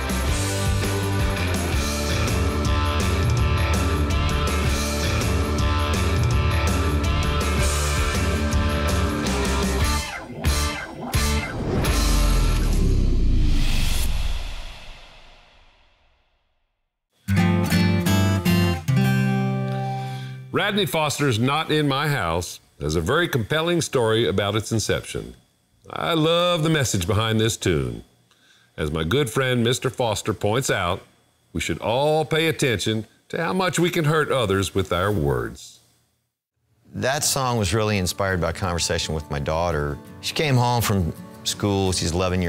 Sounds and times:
Music: 0.0 - 15.2, 17.2 - 20.6, 37.2 - 42.4
Speech: 20.5 - 28.1, 28.8 - 35.8, 36.9 - 42.4.

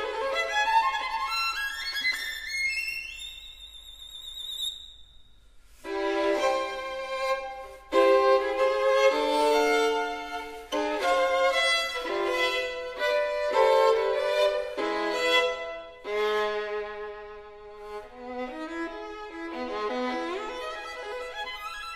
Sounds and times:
Violin, fiddle: 0.0 - 3.4, 5.8 - 21.9.

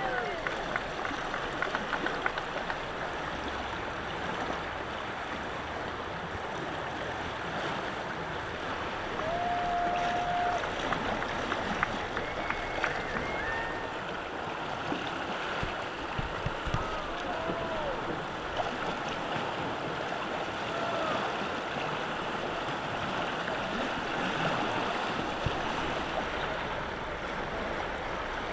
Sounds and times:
Rowboat, canoe, kayak: 0.0 - 28.5.

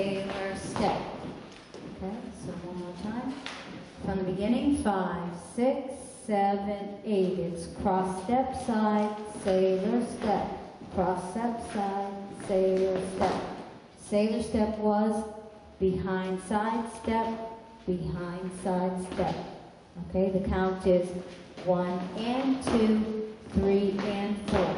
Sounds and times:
Speech: 0.0 - 1.2, 1.9 - 24.7.

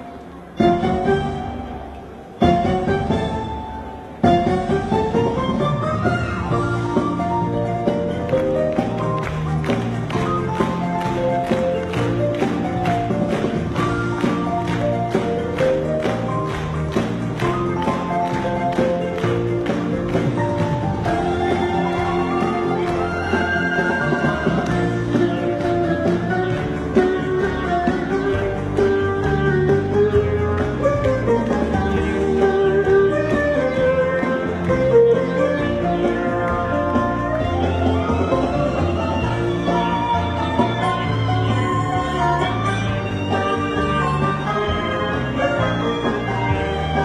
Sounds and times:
Music: 0.0 - 47.0.

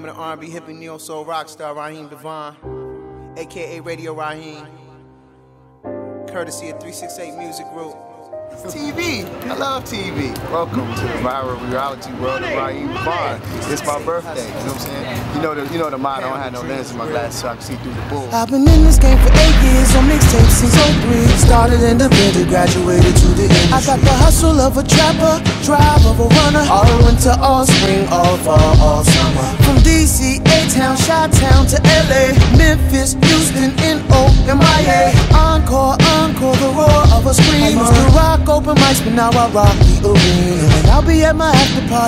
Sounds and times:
Music: 0.0 - 13.9, 18.3 - 42.0.

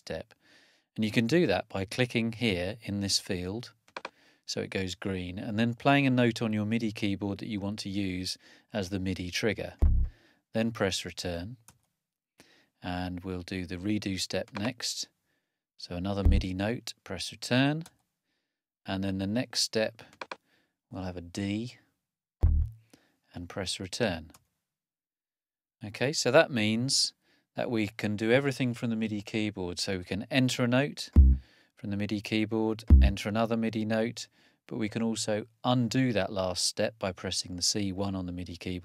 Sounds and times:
Speech: 0.0 - 0.3, 1.0 - 3.7, 4.5 - 9.8, 10.6 - 11.6, 12.8 - 15.1, 15.8 - 18.0, 18.9 - 20.1, 20.9 - 21.9, 23.3 - 24.4, 25.8 - 31.2, 31.8 - 38.8.

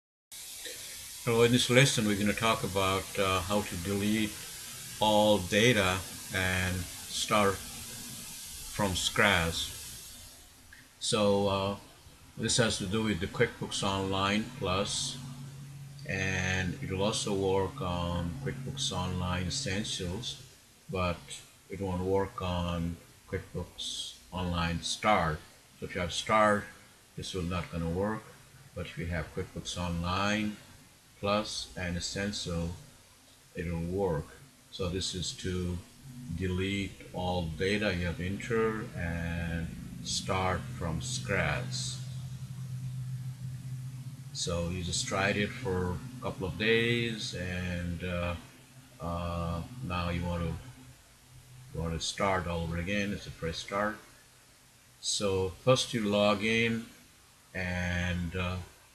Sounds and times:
Speech: 1.3 - 4.4, 5.0 - 7.7, 8.7 - 9.8, 11.0 - 15.2, 16.1 - 30.6, 31.2 - 32.8, 33.6 - 42.2, 44.4 - 48.4, 49.0 - 50.6, 51.8 - 54.0, 55.0 - 56.9, 57.6 - 58.7.

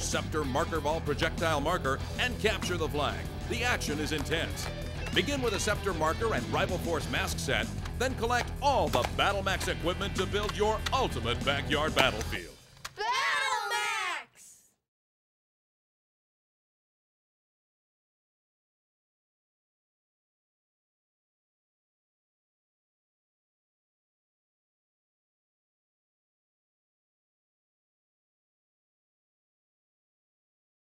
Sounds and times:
Speech: 0.0 - 4.6, 5.2 - 14.7.

